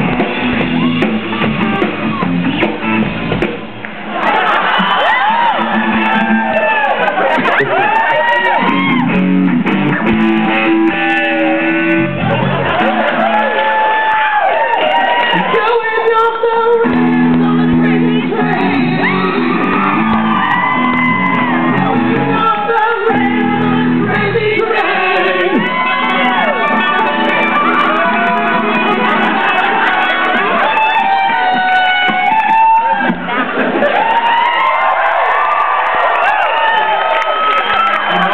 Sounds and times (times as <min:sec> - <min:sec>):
Electric guitar: 0:00.0 - 0:35.3.